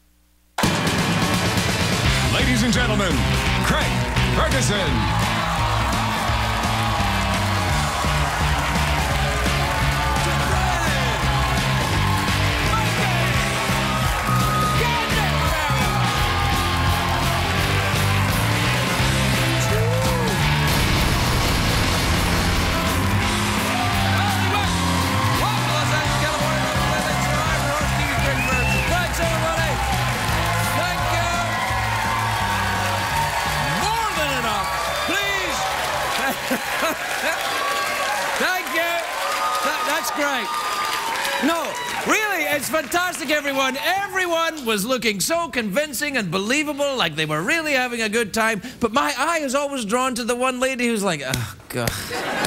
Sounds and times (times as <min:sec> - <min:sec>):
Music: 0:00.6 - 0:37.0.